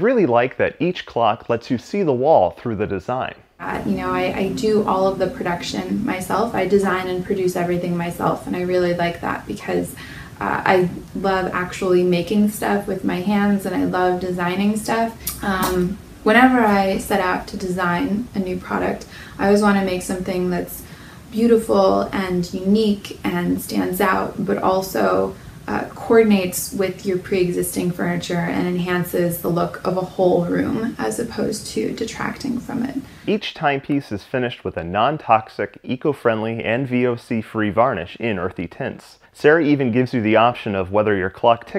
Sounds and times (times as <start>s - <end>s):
Speech: 0.0s - 20.8s, 21.4s - 41.7s.